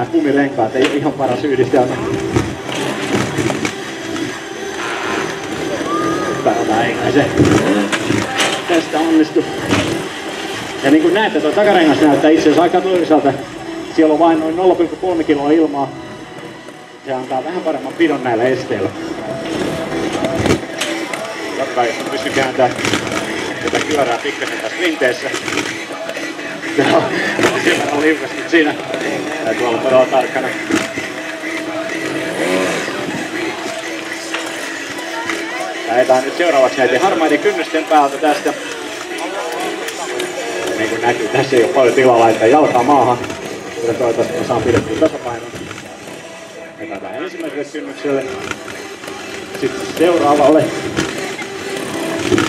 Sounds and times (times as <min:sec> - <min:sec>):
Speech: 0:00.0 - 0:02.0, 0:10.8 - 0:15.9, 0:21.6 - 0:22.8, 0:23.4 - 0:25.4, 0:26.7 - 0:30.6, 0:35.1 - 0:45.5, 0:46.8 - 0:48.4, 0:49.6 - 0:50.8
Music: 0:00.0 - 0:52.4
Vehicle: 0:00.0 - 0:52.4.